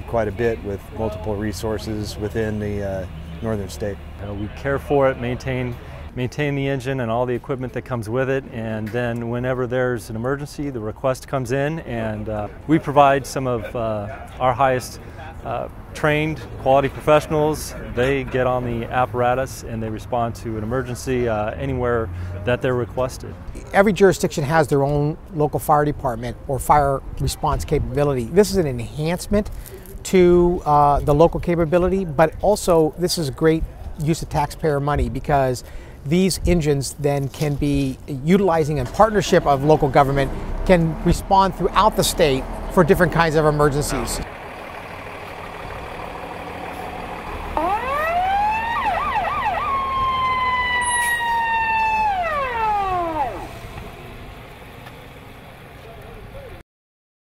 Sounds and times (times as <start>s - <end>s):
Truck: 0.0s - 6.2s, 11.7s - 34.5s, 37.4s - 56.6s
Fire engine, fire truck (siren): 46.7s - 53.7s.